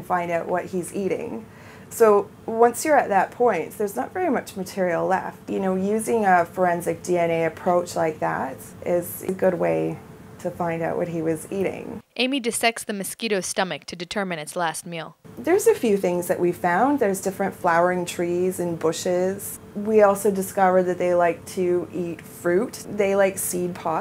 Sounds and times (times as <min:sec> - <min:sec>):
Speech: 0:00.0 - 0:24.0.